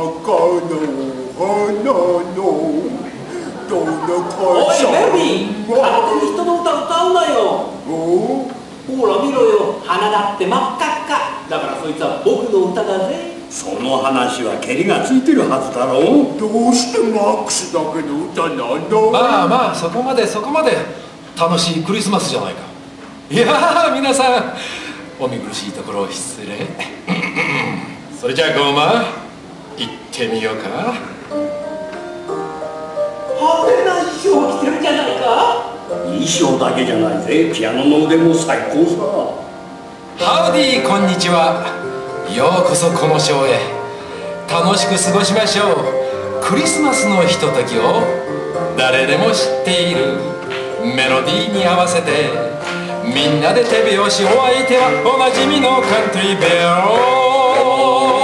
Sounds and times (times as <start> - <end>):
Music: 0.0 - 26.5, 27.3 - 58.2.